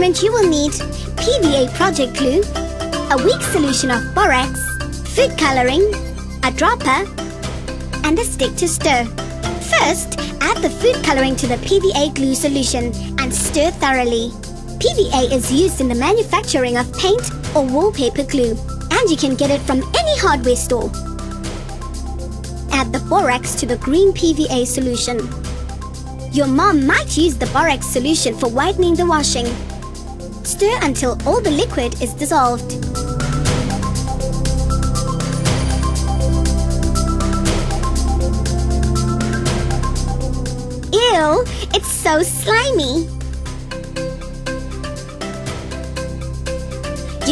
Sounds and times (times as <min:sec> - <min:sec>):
Speech: 0:00.0 - 0:07.1, 0:08.0 - 0:20.9, 0:22.7 - 0:25.3, 0:26.3 - 0:29.6, 0:30.5 - 0:32.8, 0:40.9 - 0:43.1
Music: 0:00.0 - 0:47.3.